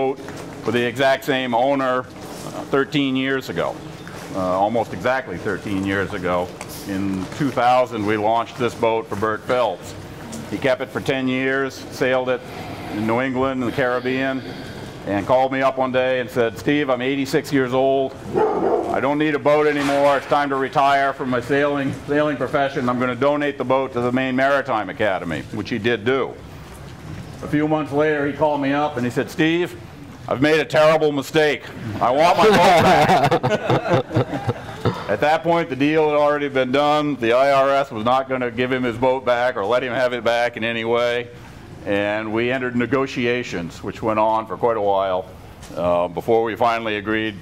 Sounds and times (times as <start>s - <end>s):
Speech: 0.0s - 12.4s, 13.0s - 18.2s, 18.9s - 26.4s, 27.4s - 33.2s, 35.1s - 47.4s.